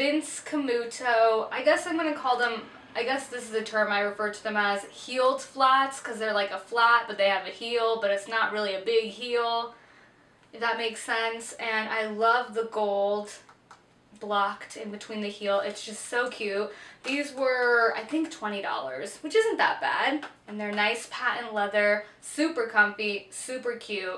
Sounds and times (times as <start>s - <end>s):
Speech: 0.0s - 9.8s, 10.6s - 13.5s, 14.2s - 24.1s.